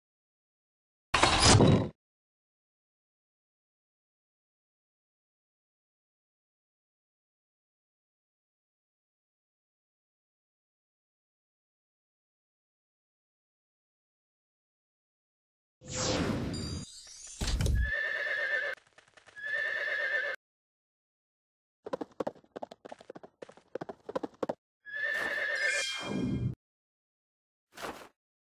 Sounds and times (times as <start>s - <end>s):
Neigh, whinny: 17.8s - 18.8s, 19.4s - 20.4s, 24.9s - 26.2s
Clip-clop: 21.9s - 24.6s.